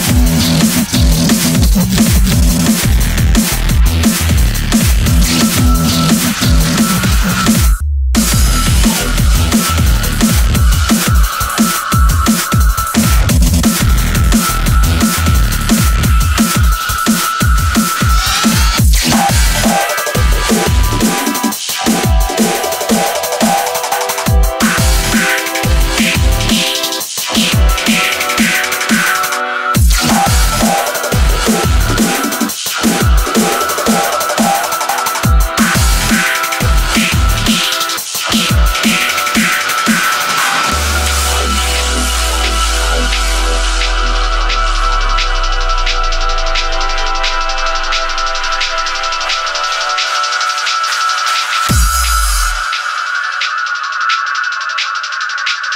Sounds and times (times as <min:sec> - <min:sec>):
Drum and bass: 0:00.0 - 0:55.7
Electronic dance music: 0:00.0 - 0:55.7.